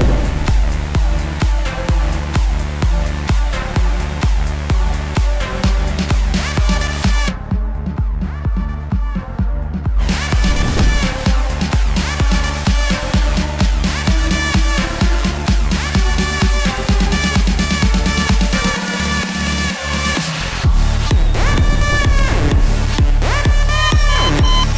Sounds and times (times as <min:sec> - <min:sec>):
Soundtrack music: 0:00.0 - 0:24.7.